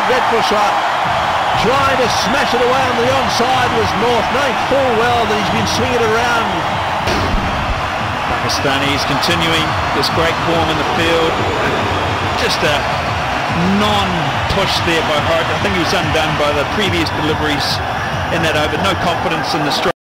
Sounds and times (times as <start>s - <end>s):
Speech: 0.0s - 0.8s, 1.6s - 6.6s, 8.3s - 11.5s, 12.4s - 12.8s, 13.5s - 20.0s.